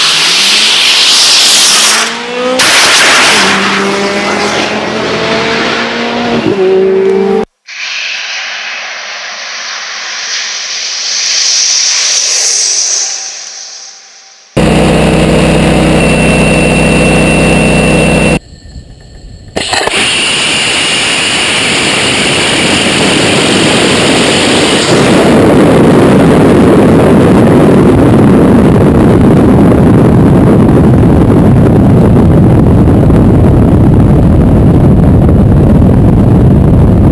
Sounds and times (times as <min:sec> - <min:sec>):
Vehicle: 0:00.0 - 0:07.6, 0:14.6 - 0:37.1.